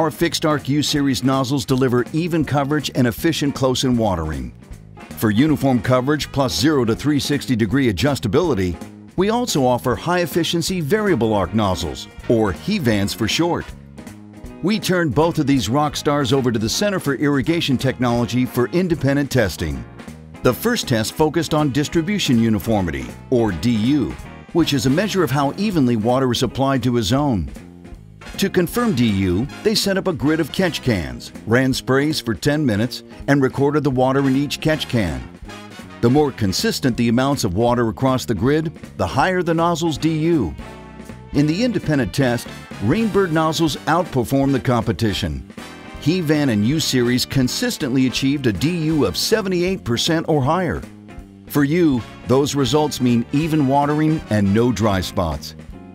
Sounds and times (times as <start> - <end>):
Speech: 0.0 - 4.6, 5.2 - 13.7, 14.6 - 19.8, 20.4 - 27.6, 28.4 - 35.3, 36.0 - 40.6, 41.4 - 45.4, 46.0 - 50.9, 51.5 - 55.6
Music: 0.0 - 55.9.